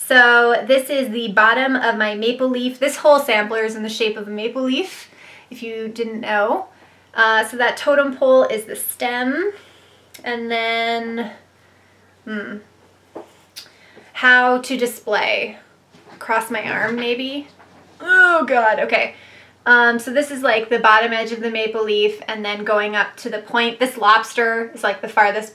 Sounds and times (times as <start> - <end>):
Speech: 0.0 - 9.6, 10.2 - 11.4, 12.3 - 12.6, 14.2 - 15.6, 16.2 - 25.5.